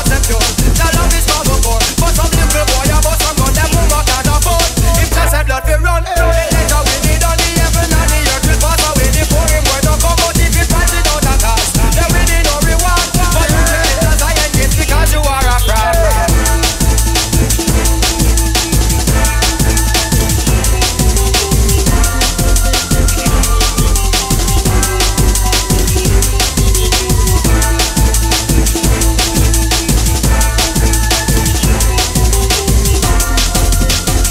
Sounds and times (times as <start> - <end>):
Reggae: 0.0 - 34.3
Song: 0.0 - 34.3.